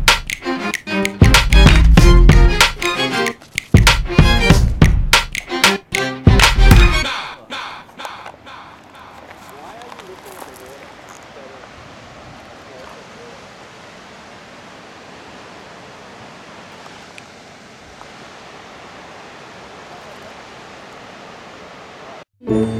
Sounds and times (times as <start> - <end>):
Waves, surf: 7.1 - 22.2
Speech: 9.4 - 11.7, 12.6 - 13.4.